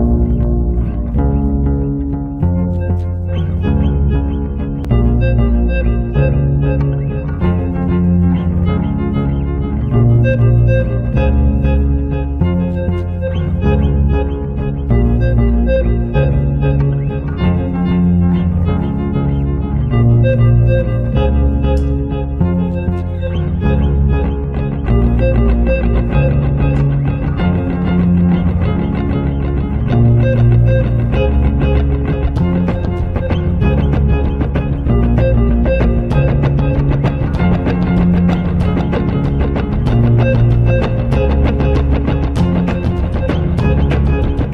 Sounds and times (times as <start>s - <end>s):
Double bass: 0.0s - 44.5s
Guitar: 0.0s - 44.5s.